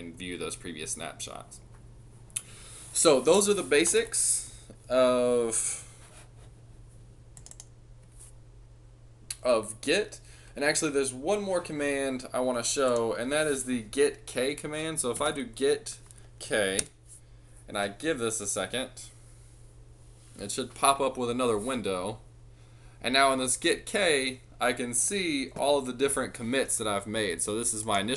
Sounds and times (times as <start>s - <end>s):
Speech: 0.0s - 1.6s, 3.0s - 5.9s, 9.3s - 16.9s, 17.7s - 19.2s, 20.4s - 22.2s, 23.0s - 28.1s
Computer keyboard: 7.4s - 7.7s.